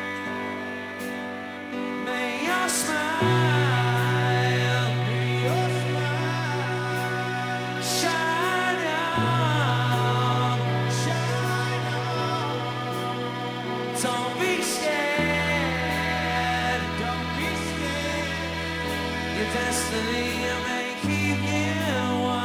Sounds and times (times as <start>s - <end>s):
Music: 0.0s - 22.4s.